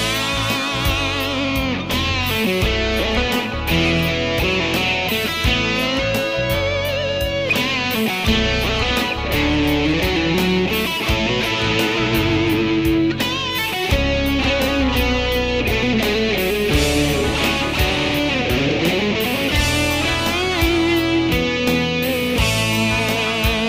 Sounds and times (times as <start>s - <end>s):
Music: 0.0s - 23.6s.